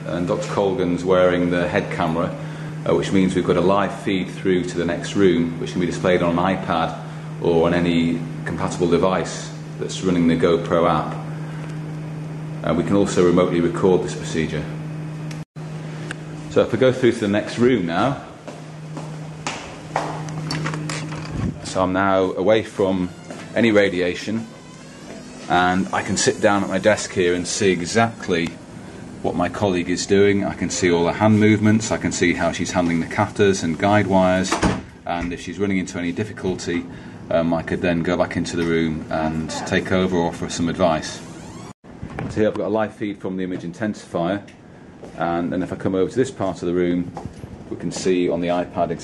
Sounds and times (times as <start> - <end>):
Speech: 0.0 - 11.2, 12.6 - 14.8, 16.5 - 18.4, 21.6 - 24.5, 25.5 - 28.6, 29.2 - 41.3, 42.2 - 44.6, 45.2 - 49.0.